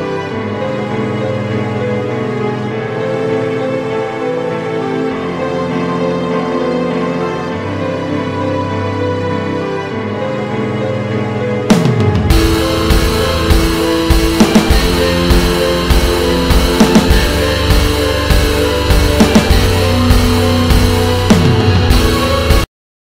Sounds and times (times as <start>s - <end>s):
Music: 0.0s - 22.7s.